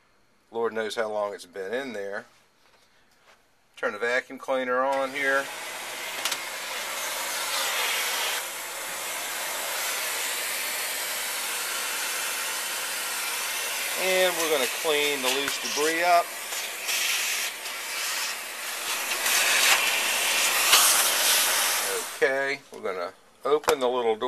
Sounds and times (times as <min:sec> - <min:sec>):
Inside, small room: 0:00.0 - 0:24.2
Speech: 0:00.5 - 0:02.3, 0:03.8 - 0:05.5, 0:14.0 - 0:16.3, 0:21.9 - 0:24.2
Vacuum cleaner: 0:04.9 - 0:22.6.